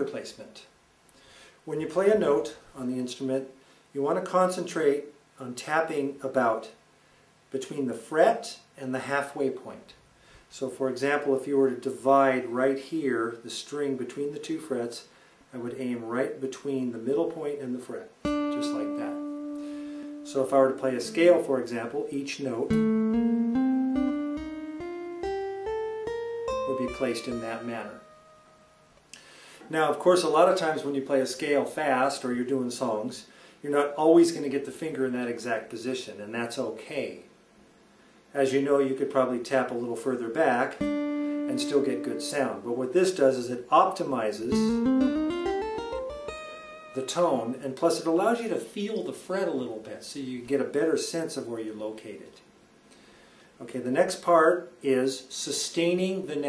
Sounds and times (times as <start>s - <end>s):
Speech: 0.0s - 0.7s, 1.7s - 6.8s, 7.5s - 19.2s, 20.3s - 22.8s, 26.7s - 28.0s, 29.6s - 37.3s, 38.3s - 40.8s, 41.5s - 44.8s, 47.0s - 52.5s, 53.6s - 56.4s
Music: 18.2s - 21.8s, 22.7s - 29.0s, 40.8s - 42.6s, 44.5s - 47.4s.